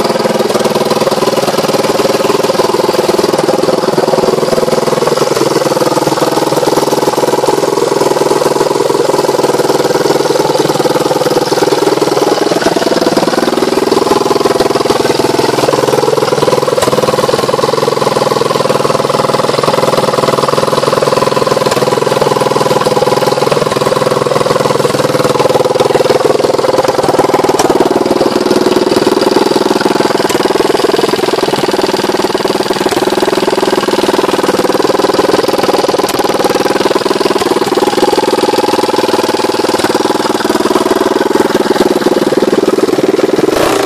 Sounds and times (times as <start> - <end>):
Idling: 0.0 - 43.8
Medium engine (mid frequency): 0.0 - 43.8
Vehicle: 0.0 - 43.8.